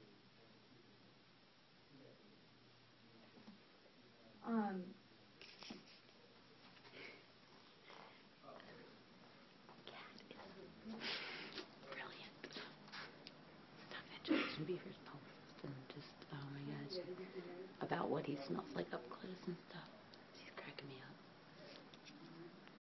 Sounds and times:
Speech: 14.1 - 22.6.

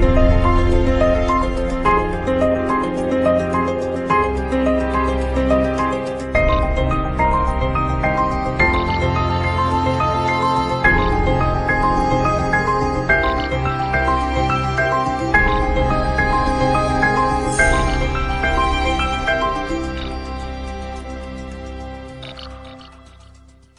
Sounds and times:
Music: 0.0 - 23.7.

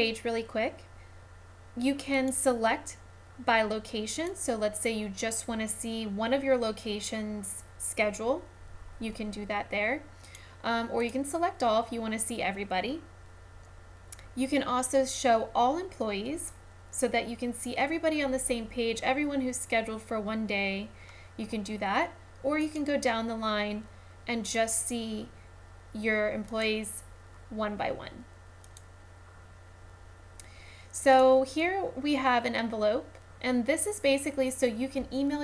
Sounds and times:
Speech: 0.0 - 0.9, 1.8 - 13.1, 14.4 - 25.4, 26.0 - 28.3, 31.0 - 35.4.

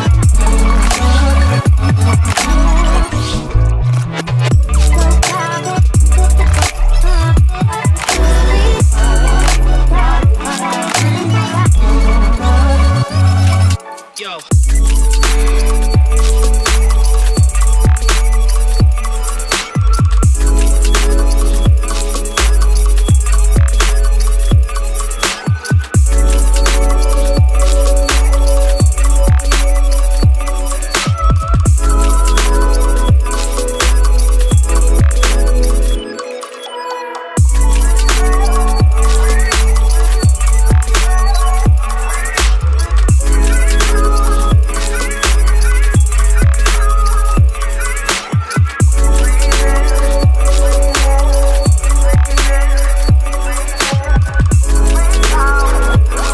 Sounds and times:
Electronic dance music: 0.0 - 56.3.

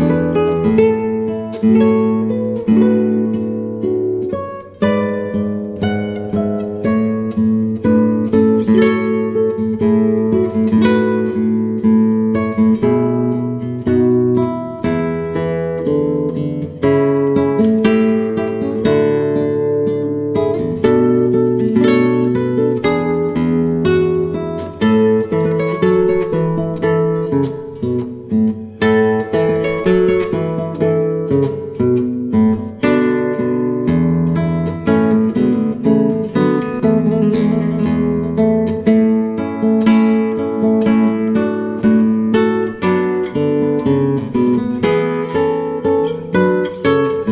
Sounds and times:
Music: 0.0 - 47.3.

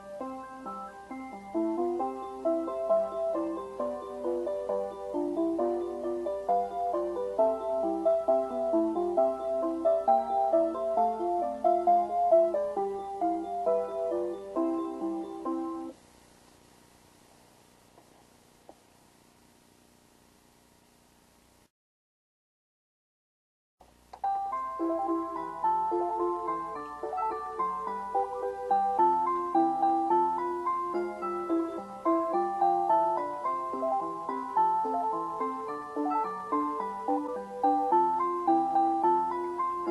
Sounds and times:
Music: 0.0 - 16.0, 24.1 - 39.9.

